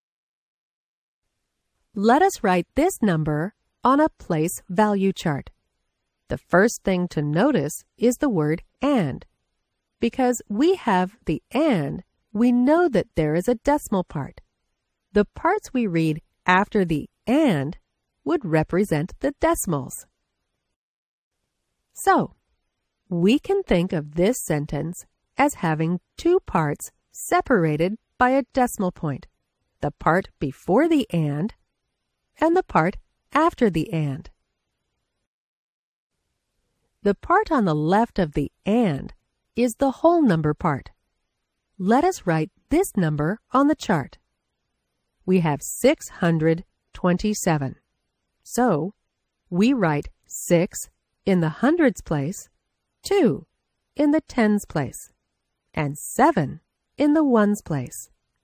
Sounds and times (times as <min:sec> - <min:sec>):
Speech: 0:02.0 - 0:05.5, 0:06.3 - 0:09.3, 0:10.0 - 0:14.4, 0:15.2 - 0:20.1, 0:22.0 - 0:22.3, 0:23.1 - 0:31.6, 0:32.4 - 0:34.3, 0:37.1 - 0:40.9, 0:41.8 - 0:44.2, 0:45.3 - 0:47.8, 0:48.5 - 0:49.0, 0:49.6 - 0:52.5, 0:53.1 - 0:55.1, 0:55.8 - 0:58.1.